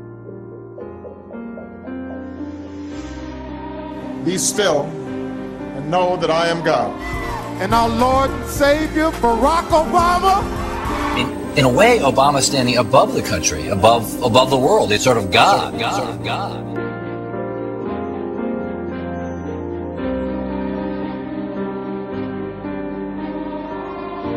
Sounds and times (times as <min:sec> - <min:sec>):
Music: 0:00.0 - 0:24.3.